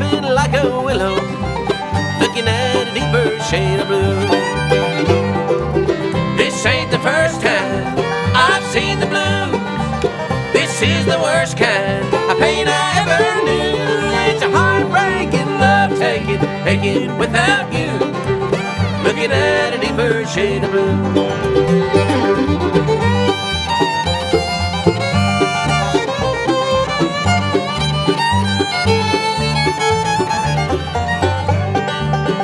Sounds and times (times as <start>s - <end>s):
Banjo: 0.0s - 32.4s
Bluegrass: 0.0s - 32.4s.